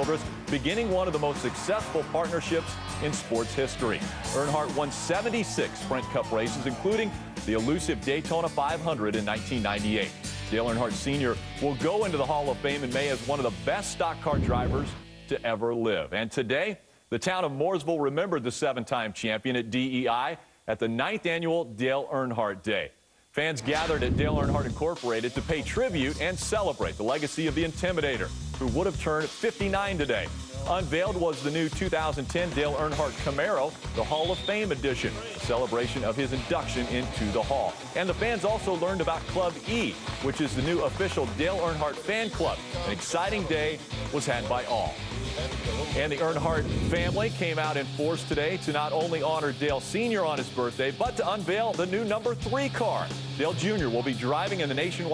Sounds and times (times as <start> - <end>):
Music: 0.0 - 15.7, 23.6 - 55.1
Speech: 0.0 - 45.0, 45.8 - 55.1.